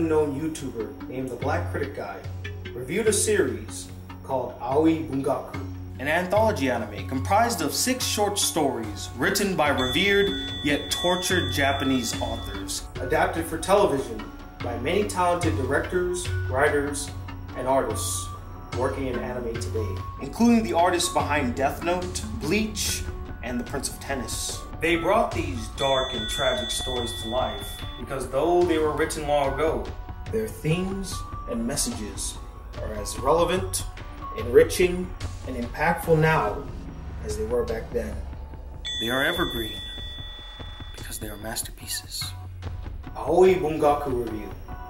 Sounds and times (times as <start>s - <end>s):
Speech: 0.0s - 2.2s, 2.8s - 38.3s, 38.9s - 39.9s, 41.0s - 42.4s, 43.2s - 44.6s
Music: 0.0s - 44.9s.